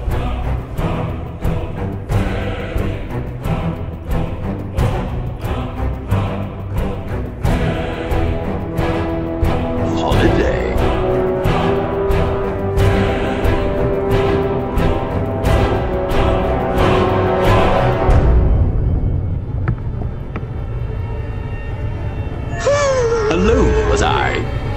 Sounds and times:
Music: 0:00.0 - 0:24.7
Speech: 0:09.9 - 0:10.8, 0:22.6 - 0:24.5.

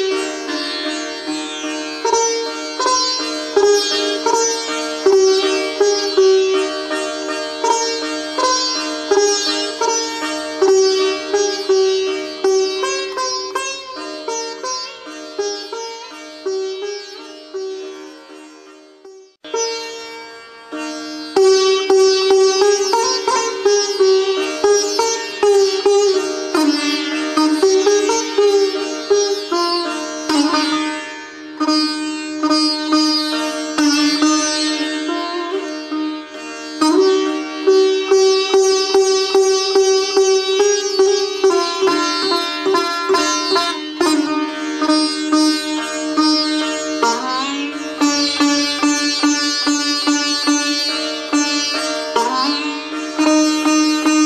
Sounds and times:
Sitar: 0:00.0 - 0:54.2.

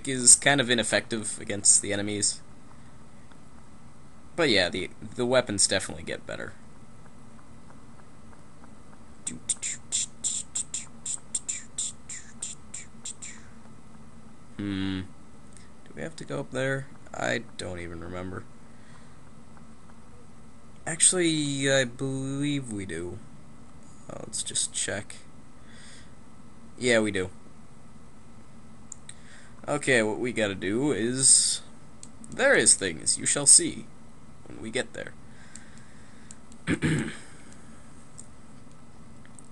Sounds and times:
Speech: 0:00.0 - 0:02.4, 0:04.4 - 0:06.6, 0:09.3 - 0:10.7, 0:14.6 - 0:15.1, 0:15.9 - 0:18.5, 0:20.8 - 0:23.2, 0:24.1 - 0:25.3, 0:26.8 - 0:27.4, 0:29.6 - 0:31.7, 0:32.3 - 0:33.9, 0:34.5 - 0:35.2.

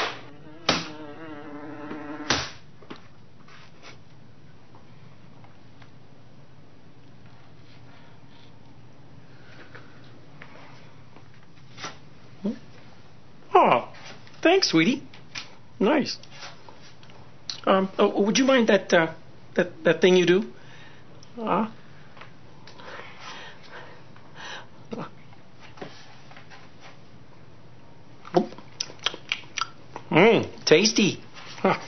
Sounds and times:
Speech: 0:13.5 - 0:15.1, 0:17.6 - 0:20.6, 0:30.1 - 0:31.2.

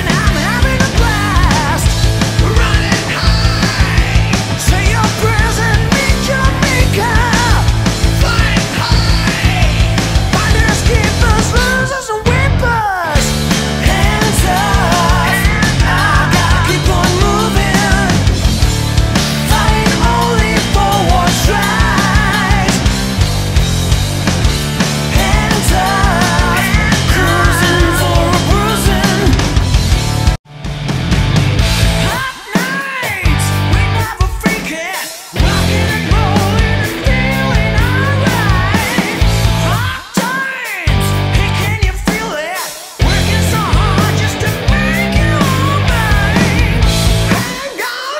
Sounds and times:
Music: 0:00.0 - 0:48.1.

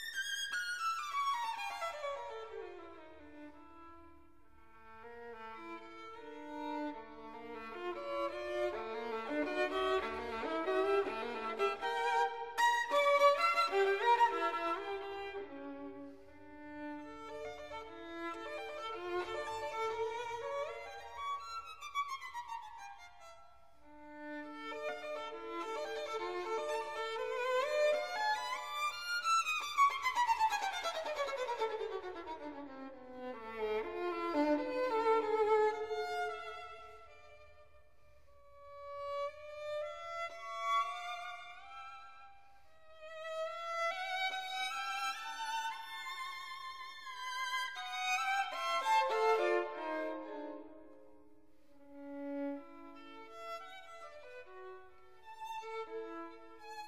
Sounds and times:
Violin, fiddle: 0:00.0 - 0:56.8.

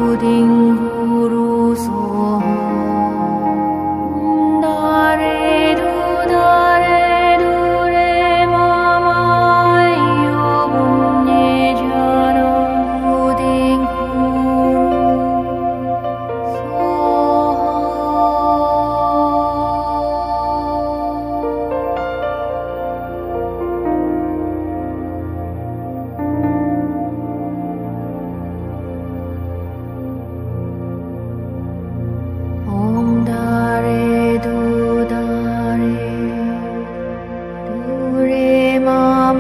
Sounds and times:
Mantra: 0:00.0 - 0:23.6, 0:32.5 - 0:39.4
New-age music: 0:00.0 - 0:39.4.

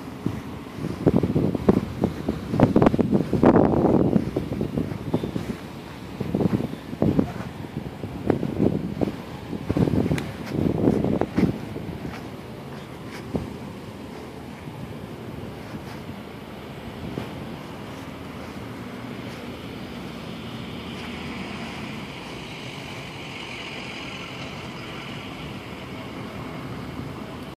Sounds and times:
Car passing by: 0:17.1 - 0:27.4.

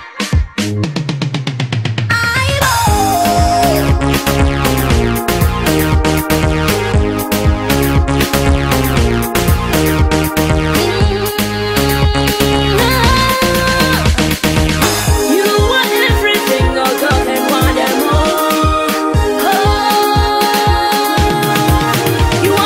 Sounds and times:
Pop music: 0:00.0 - 0:22.6.

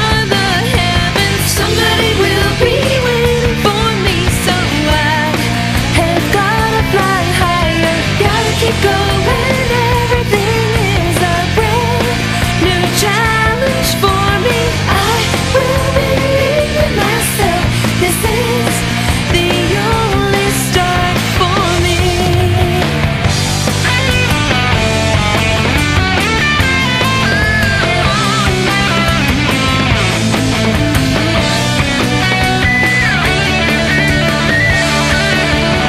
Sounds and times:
Dance music: 0:00.0 - 0:35.8.

